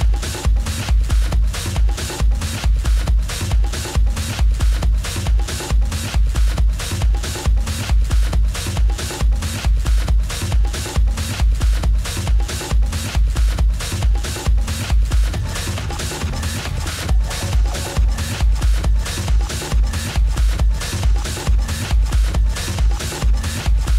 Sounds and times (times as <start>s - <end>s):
Music: 0.0s - 23.9s.